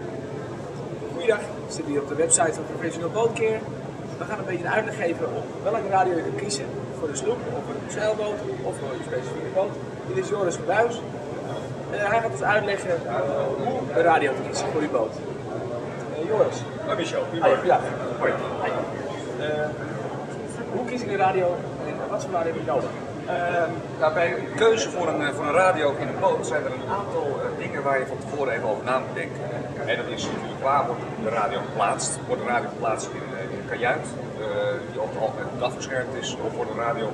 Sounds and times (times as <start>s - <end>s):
Speech: 20.4s - 37.1s.